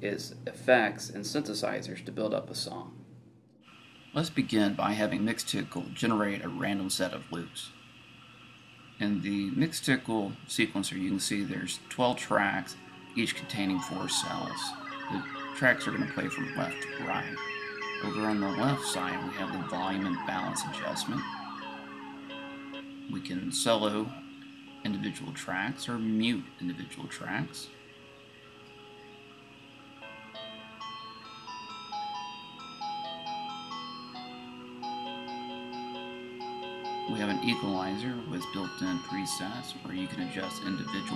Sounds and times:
Speech: 0.0s - 3.0s, 4.2s - 7.7s, 9.0s - 17.4s, 18.0s - 21.2s, 23.1s - 24.2s, 24.8s - 27.7s, 37.1s - 41.1s
Music: 10.1s - 41.1s.

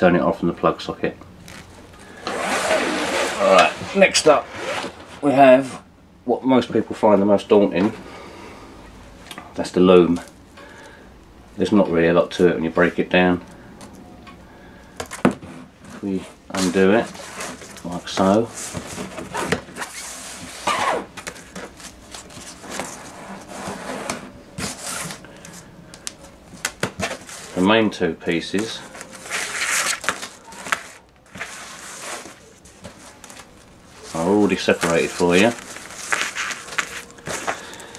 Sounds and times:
Speech: 0.0s - 1.2s, 3.4s - 4.5s, 5.2s - 8.0s, 9.6s - 10.3s, 11.6s - 13.4s, 16.0s - 17.1s, 17.8s - 18.5s, 27.6s - 28.8s, 34.1s - 35.6s
Inside, small room: 0.0s - 37.9s.

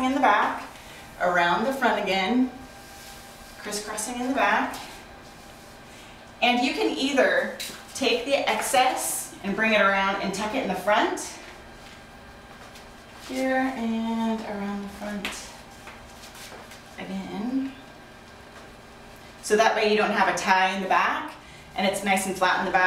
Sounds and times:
Speech: 0.0s - 2.6s, 3.6s - 5.0s, 6.4s - 11.5s, 13.3s - 15.6s, 17.0s - 17.8s, 19.4s - 22.8s
Inside, small room: 0.0s - 22.8s.

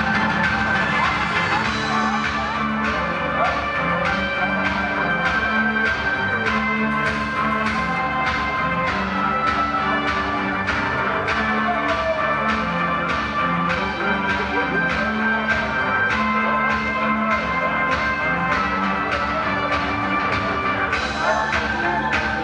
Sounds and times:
Music: 0.0s - 22.4s.

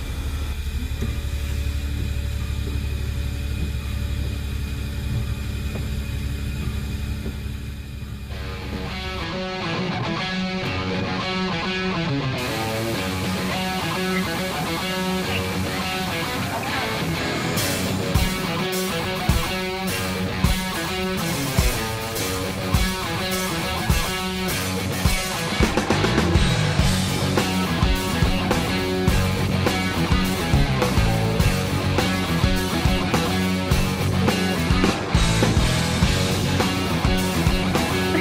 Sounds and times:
Music: 8.2s - 38.2s.

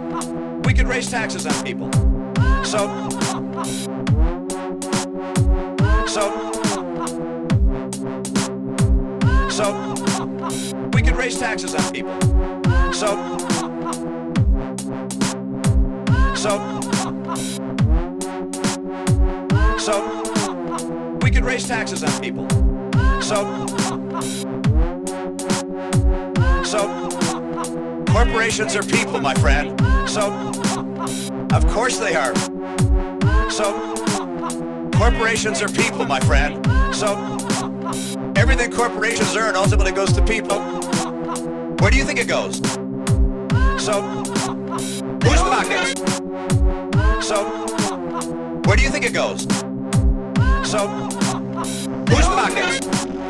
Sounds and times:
Speech: 0.7s - 1.9s, 2.5s - 3.4s, 5.9s - 6.8s, 9.3s - 10.0s, 11.0s - 12.0s, 12.9s - 13.6s, 16.2s - 17.1s, 21.2s - 22.4s, 23.2s - 23.7s, 26.5s - 27.1s, 28.1s - 30.5s, 31.5s - 32.4s, 33.3s - 34.2s, 35.0s - 37.6s, 38.4s - 41.1s, 41.8s - 42.6s, 43.6s - 44.5s, 45.2s - 46.0s, 47.0s - 47.6s, 48.7s - 49.4s, 50.5s - 51.3s, 52.1s - 52.9s
Dubstep: 28.1s - 30.8s, 35.0s - 37.7s, 45.2s - 46.2s, 52.1s - 53.2s.

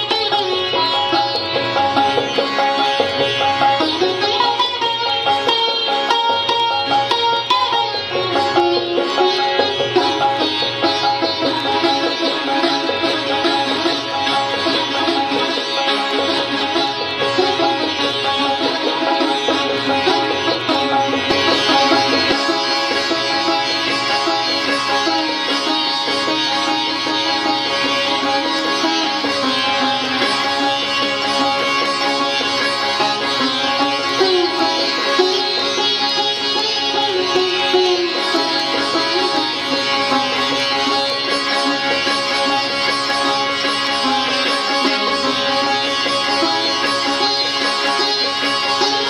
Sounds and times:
Sitar: 0.0s - 49.1s.

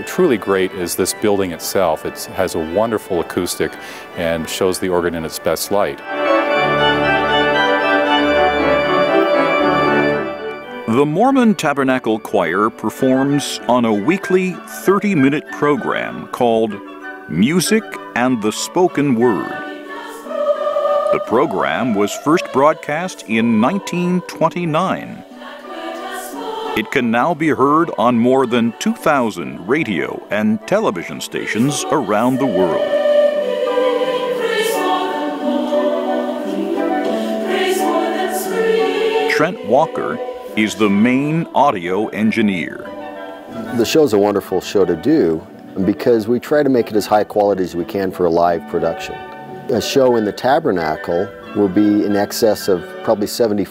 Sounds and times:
Choir: 17.4s - 44.0s.

